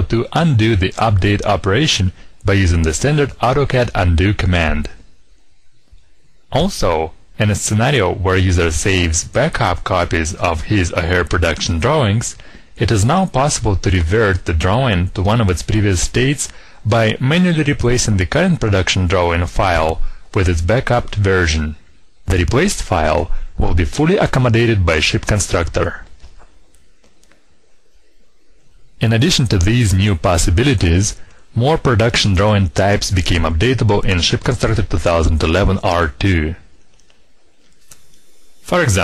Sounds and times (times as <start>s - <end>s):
Speech: 0.0s - 5.1s, 6.5s - 26.1s, 29.0s - 36.7s, 38.7s - 39.0s.